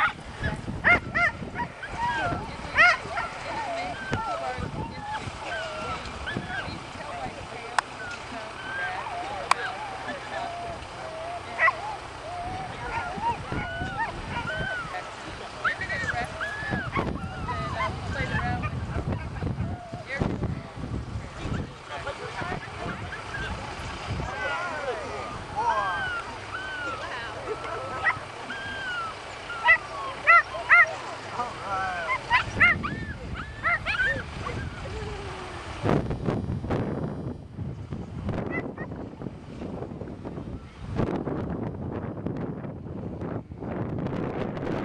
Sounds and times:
Whimper (dog): 0.9s - 7.3s, 8.0s - 15.0s, 15.7s - 18.8s, 25.6s - 30.9s, 31.9s - 35.6s
Yip: 32.1s - 34.2s.

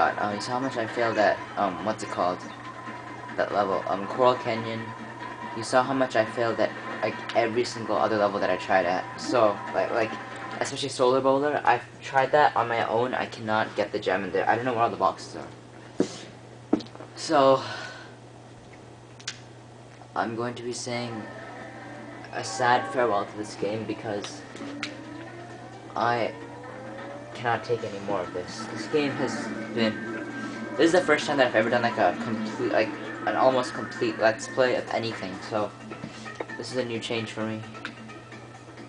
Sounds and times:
Speech: 0.0s - 2.4s, 3.4s - 4.9s, 5.6s - 15.5s, 17.2s - 17.7s, 20.2s - 21.3s, 22.3s - 24.4s, 26.0s - 26.4s, 27.4s - 30.0s, 30.8s - 35.7s, 36.6s - 37.6s.

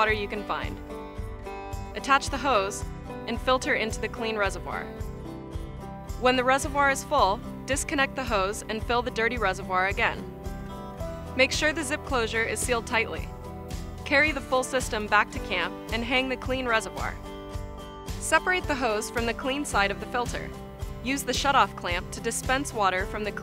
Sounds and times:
Speech: 0.0s - 0.8s, 2.0s - 4.9s, 6.2s - 10.2s, 11.4s - 13.3s, 14.1s - 17.2s, 18.2s - 23.4s
Music: 0.0s - 23.4s.

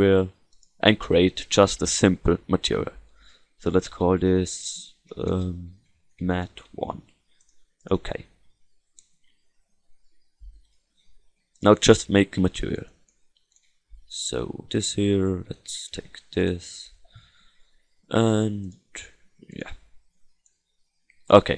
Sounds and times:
Speech: 0.0s - 3.0s, 3.6s - 7.0s, 7.9s - 8.4s, 11.6s - 13.0s, 14.1s - 17.0s, 18.1s - 19.8s, 21.3s - 21.5s.

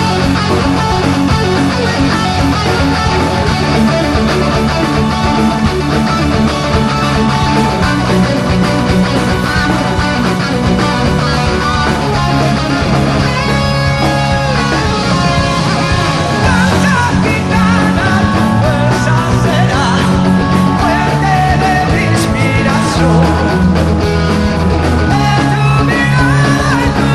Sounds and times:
Music: 0.0s - 27.1s.

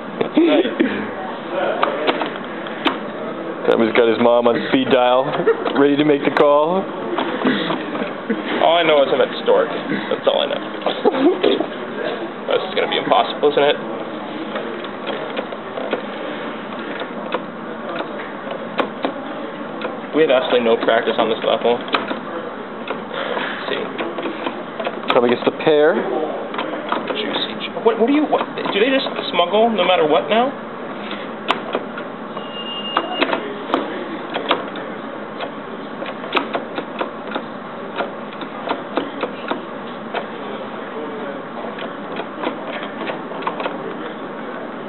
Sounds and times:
Inside, public space: 0.0s - 44.8s.

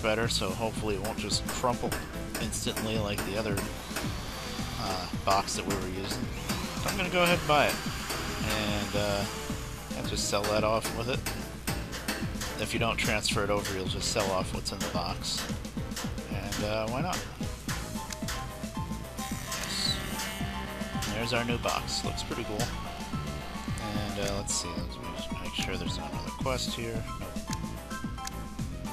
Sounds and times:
Speech: 0.0s - 3.7s, 4.8s - 7.8s, 8.4s - 9.3s, 9.9s - 11.3s, 12.6s - 15.5s, 16.3s - 17.4s, 19.6s - 20.2s, 21.1s - 22.8s, 23.8s - 27.0s
Music: 0.0s - 28.9s.

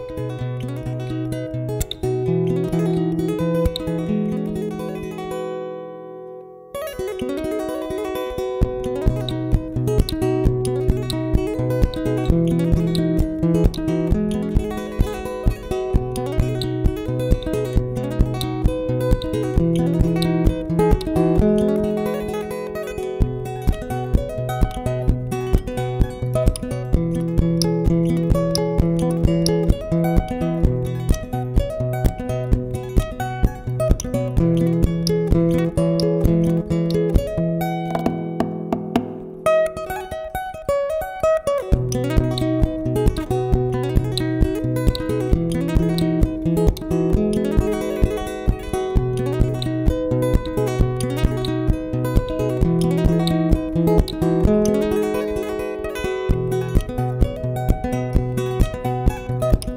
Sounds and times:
Music: 0.0s - 59.7s.

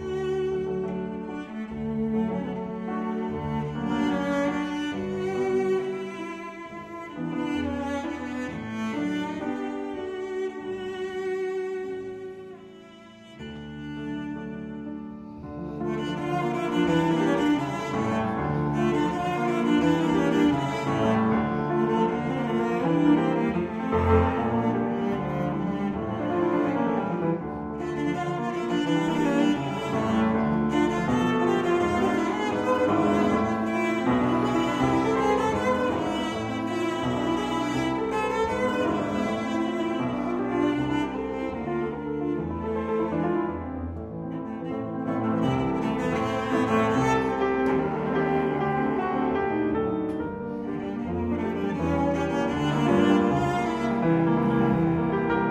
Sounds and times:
Double bass: 0.0s - 9.4s, 13.2s - 55.5s
Cello: 0.0s - 55.5s
Classical music: 0.0s - 55.5s
Piano: 0.0s - 55.5s
String section: 0.0s - 55.5s.

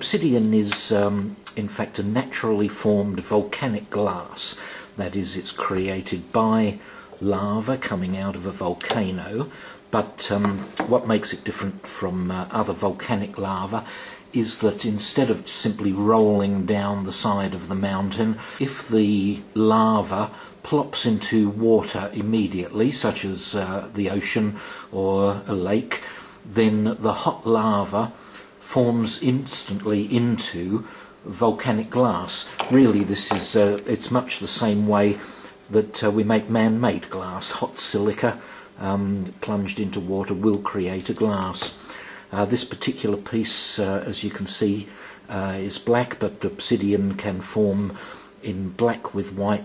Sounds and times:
Speech: 0.0s - 49.6s.

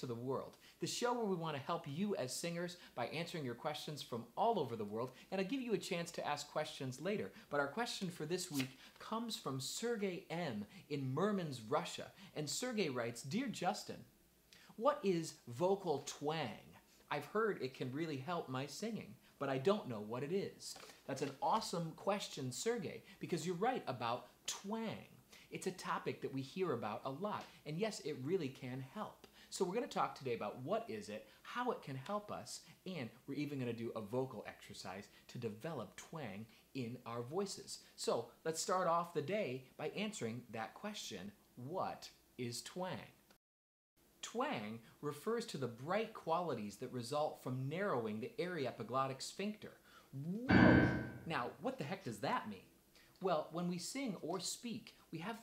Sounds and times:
Speech: 0.0s - 14.1s, 14.7s - 43.2s, 44.2s - 55.4s.

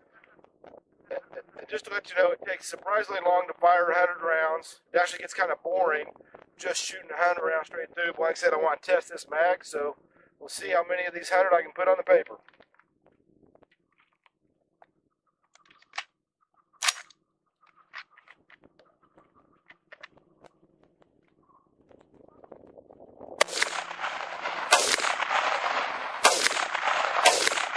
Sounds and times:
Outside, rural or natural: 0.0s - 27.7s
Speech: 1.1s - 12.5s.

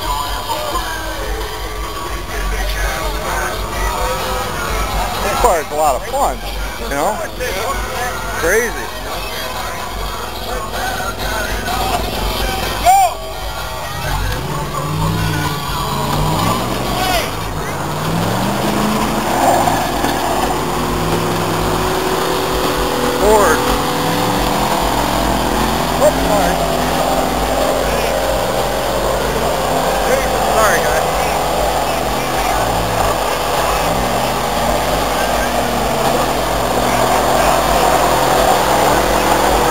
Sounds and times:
Speech: 0.0s - 17.9s, 23.1s - 23.7s, 25.9s - 27.0s, 27.6s - 28.4s, 29.3s - 39.7s
Music: 0.0s - 18.0s.

